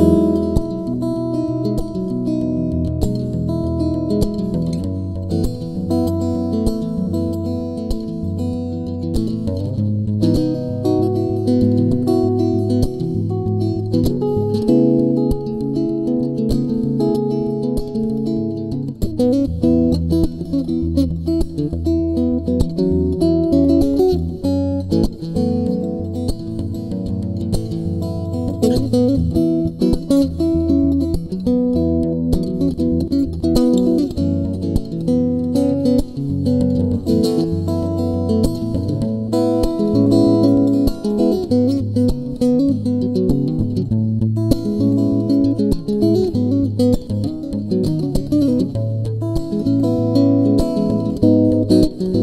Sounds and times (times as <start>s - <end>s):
Guitar: 0.0s - 52.2s.